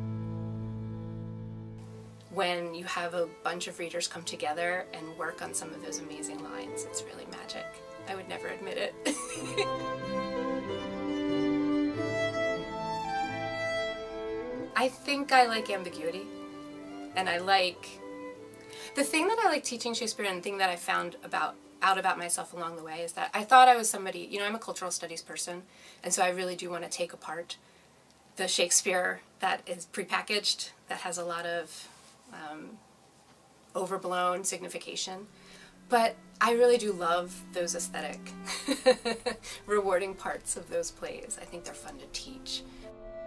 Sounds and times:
Speech: 2.3s - 9.6s, 14.8s - 16.2s, 17.2s - 18.0s, 19.0s - 27.6s, 28.4s - 32.8s, 33.8s - 35.3s, 35.9s - 42.6s
Violin, fiddle: 4.8s - 19.1s.

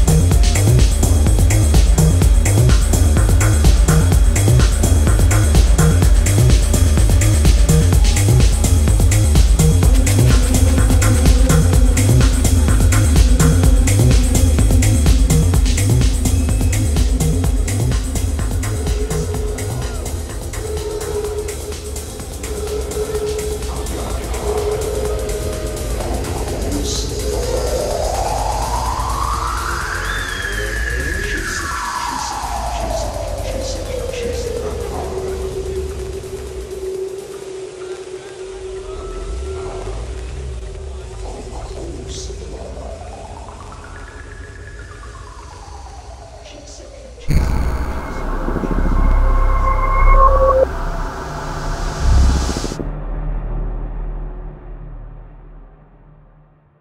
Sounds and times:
Electronic music: 0.0s - 26.9s, 47.3s - 52.8s.

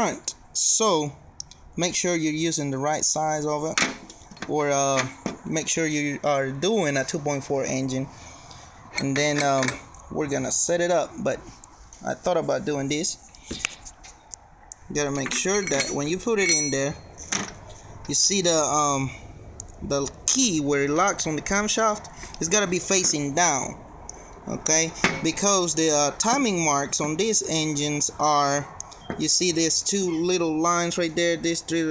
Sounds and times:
Speech: 0.0s - 1.2s, 1.8s - 3.8s, 4.4s - 8.1s, 9.0s - 13.2s, 14.8s - 17.0s, 18.1s - 19.2s, 19.8s - 23.8s, 24.5s - 31.9s.

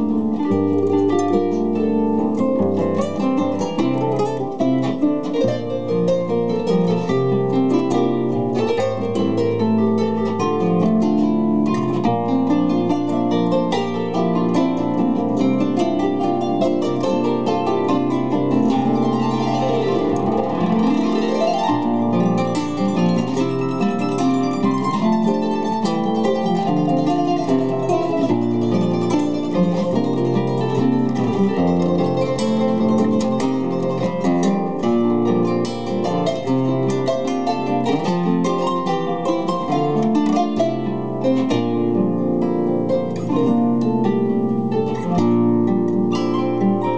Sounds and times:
Bowed string instrument: 0.0s - 46.9s
Guitar: 0.0s - 46.9s
Harp: 0.0s - 46.9s.

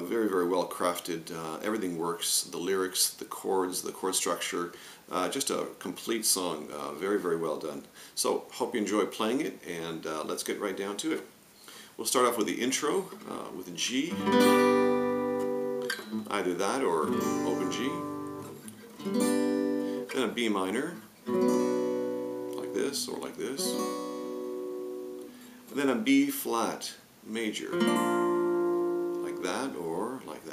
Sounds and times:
Speech: 0.0s - 11.3s, 12.0s - 14.2s, 16.2s - 18.1s, 20.1s - 21.0s, 22.6s - 23.8s, 25.7s - 27.8s, 29.2s - 30.5s
Acoustic guitar: 11.6s - 26.7s, 27.3s - 30.5s
Strum: 14.1s - 26.2s, 27.7s - 30.1s.

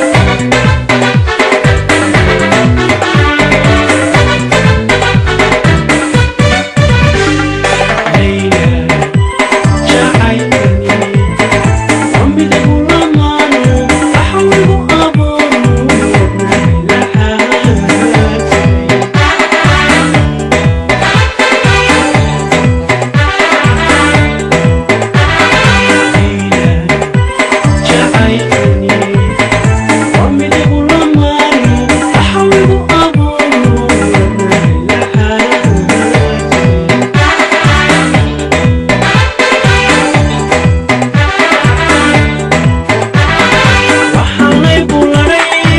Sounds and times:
Middle Eastern music: 0.0s - 45.7s.

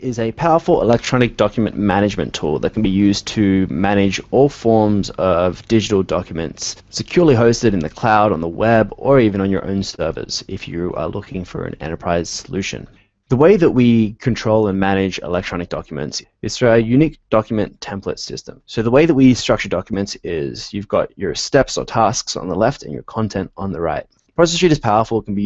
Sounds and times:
Speech synthesizer: 0.0s - 25.4s.

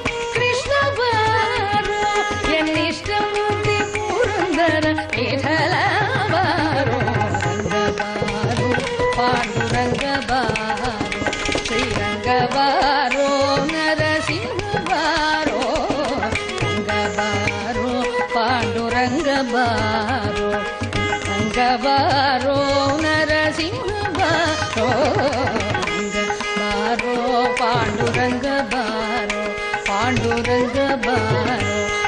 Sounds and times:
Carnatic music: 0.0s - 32.0s
Tabla: 0.0s - 32.0s.

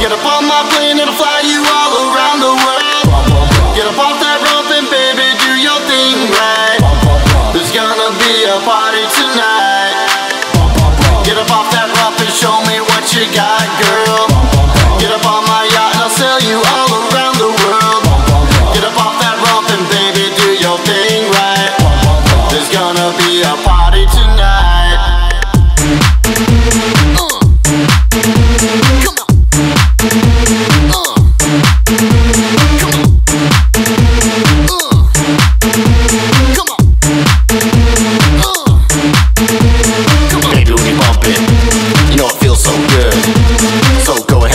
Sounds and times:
Dance music: 0.0s - 44.5s
House music: 0.0s - 44.5s.

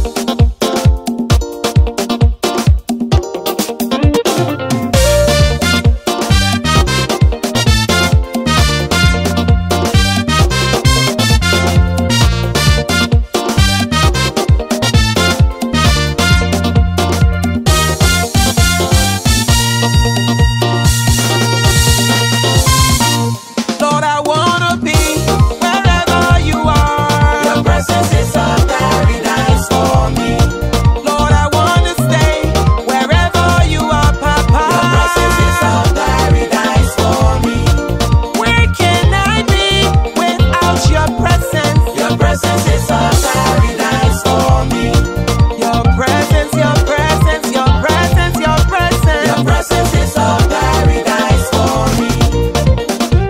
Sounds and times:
Gospel music: 0.0s - 53.2s.

